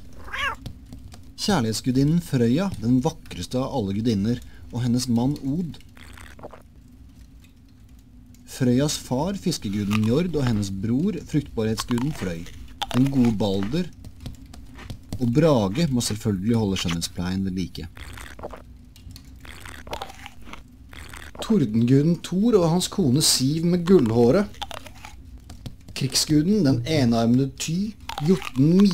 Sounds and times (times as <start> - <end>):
Speech: 1.4 - 5.8, 8.5 - 13.9, 15.2 - 17.9, 21.4 - 24.6, 26.0 - 28.9
Crunch: 5.3 - 6.6, 9.5 - 17.1, 17.9 - 22.3, 23.4 - 26.4, 27.6 - 28.9.